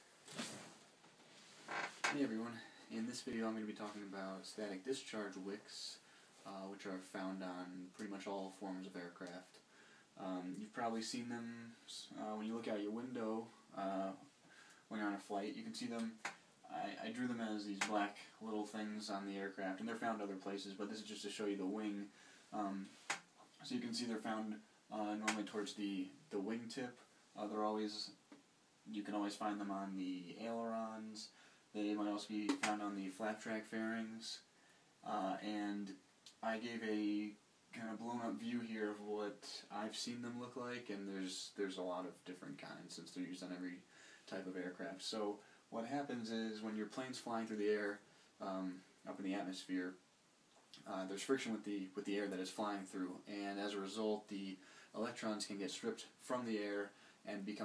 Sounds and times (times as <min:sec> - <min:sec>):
Speech: 0:02.1 - 0:09.6, 0:10.2 - 0:14.3, 0:14.9 - 0:28.2, 0:28.8 - 0:50.0, 0:50.8 - 0:57.6.